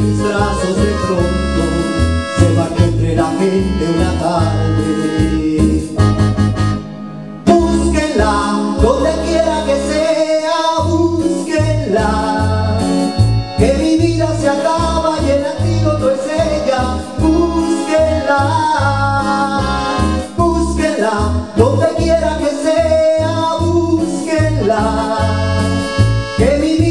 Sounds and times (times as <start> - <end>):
Guitar: 0.0 - 26.9.